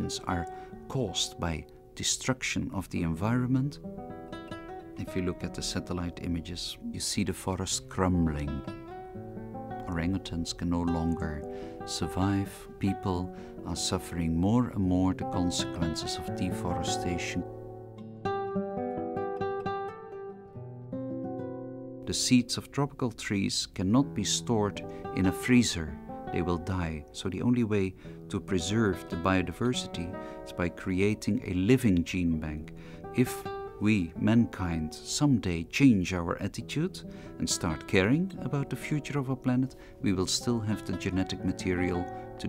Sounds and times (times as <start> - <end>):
Speech: 0.0 - 3.8, 5.0 - 8.7, 9.8 - 17.5, 22.1 - 42.4
Music: 0.0 - 42.4.